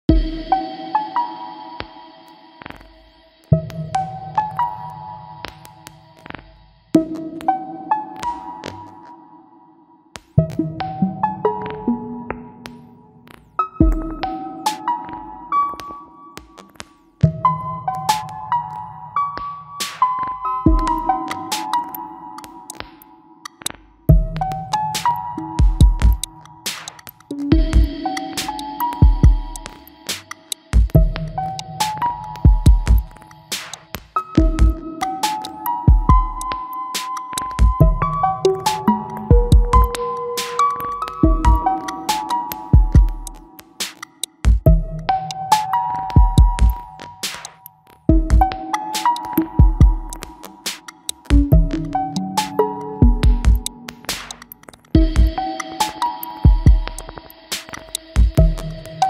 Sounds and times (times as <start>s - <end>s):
Electronic music: 0.1s - 9.6s, 10.2s - 59.0s.